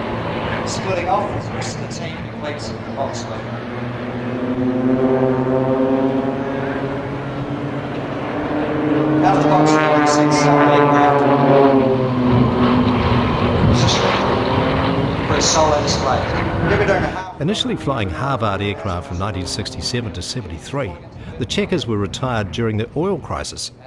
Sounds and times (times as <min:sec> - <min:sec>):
Fixed-wing aircraft, airplane: 0:00.0 - 0:23.8
Speech: 0:00.6 - 0:03.5, 0:09.2 - 0:11.2, 0:13.7 - 0:14.3, 0:15.3 - 0:23.8.